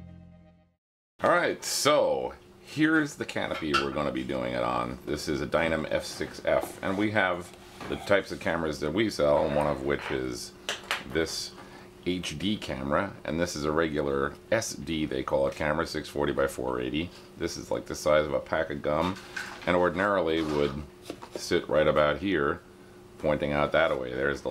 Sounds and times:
Speech: 1.2s - 22.6s, 23.2s - 24.5s.

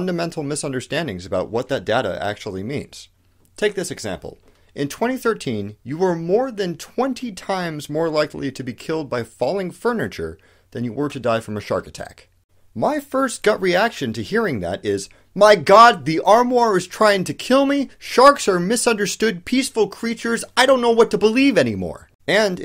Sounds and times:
Speech: 0.0s - 22.6s.

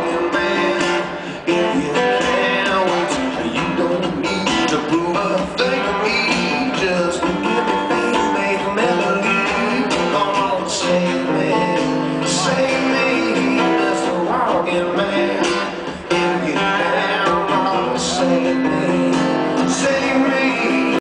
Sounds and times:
Rhythm and blues: 0.0s - 21.0s.

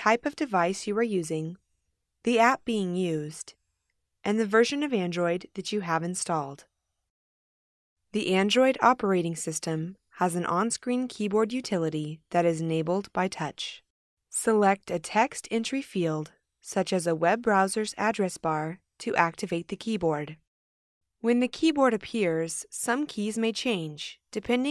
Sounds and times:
Speech: 0.0s - 1.6s, 2.3s - 3.5s, 4.3s - 6.6s, 8.2s - 13.8s, 14.4s - 20.4s, 21.2s - 24.7s.

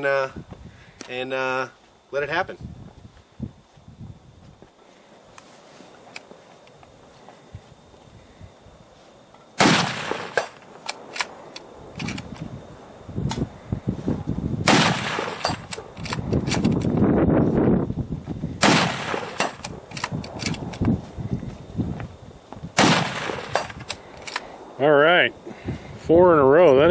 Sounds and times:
Outside, rural or natural: 0.0s - 26.9s.

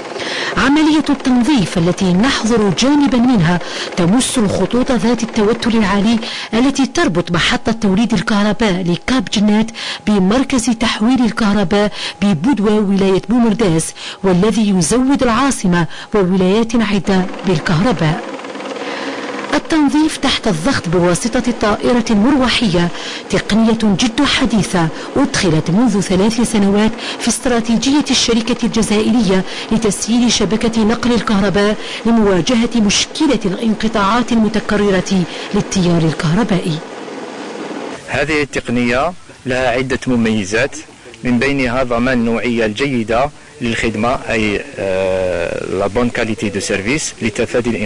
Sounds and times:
Speech: 0.6s - 18.2s, 19.6s - 36.8s, 38.1s - 47.8s.

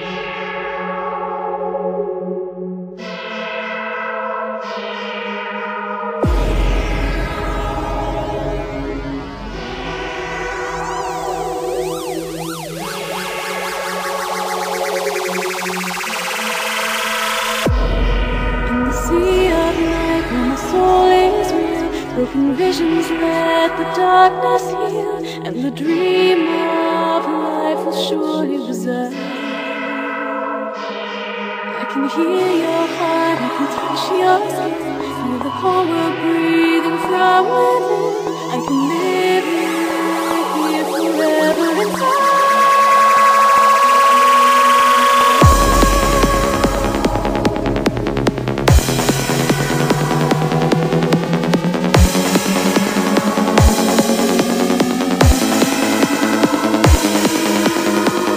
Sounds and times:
Music: 0.0s - 58.3s
Sound effect: 3.0s - 24.9s, 29.2s - 58.3s.

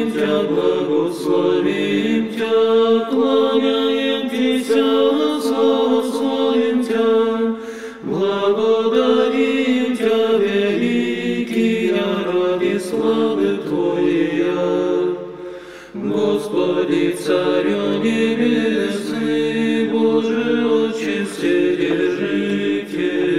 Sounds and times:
Mantra: 0.0s - 15.3s, 16.0s - 23.3s.

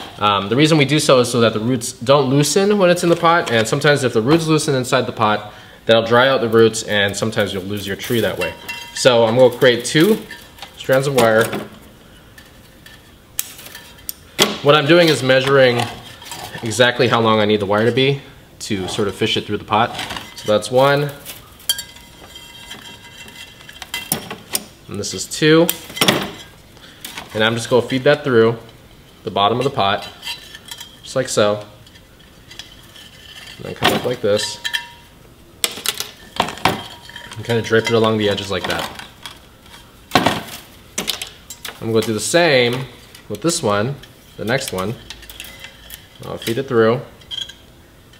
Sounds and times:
Speech: 0.0s - 11.7s, 14.6s - 21.2s, 24.9s - 25.8s, 27.3s - 30.2s, 31.1s - 31.8s, 33.6s - 34.6s, 37.3s - 39.0s, 41.8s - 45.0s, 46.2s - 47.1s.

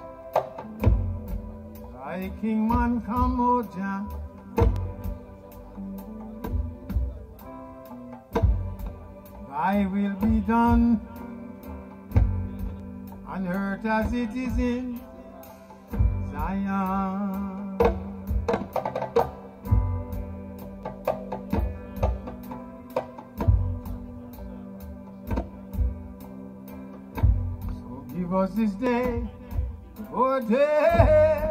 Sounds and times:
Music: 0.0s - 31.5s.

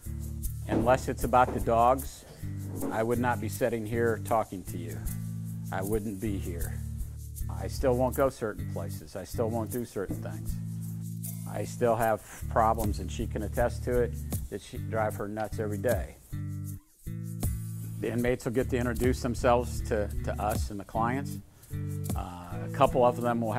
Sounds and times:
Music: 0.0s - 23.5s
Speech: 0.7s - 5.1s, 5.7s - 6.8s, 7.5s - 10.6s, 11.5s - 16.2s, 18.0s - 21.4s, 22.2s - 23.5s.

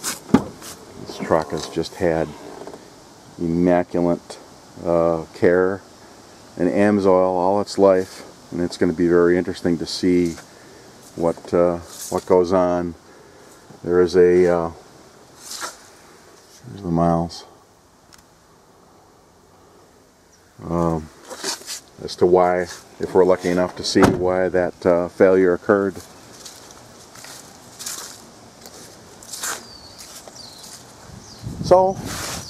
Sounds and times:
Speech: 1.0s - 2.5s, 3.4s - 5.8s, 6.6s - 10.4s, 11.2s - 13.0s, 13.8s - 14.8s, 16.6s - 17.6s, 20.6s - 21.1s, 22.0s - 26.1s, 31.6s - 32.1s.

